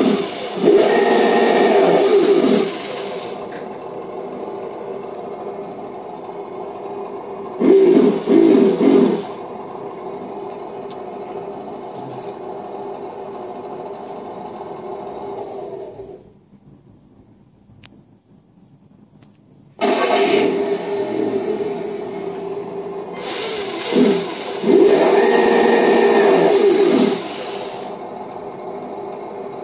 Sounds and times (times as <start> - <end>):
Car: 0.0 - 17.8, 19.8 - 29.6.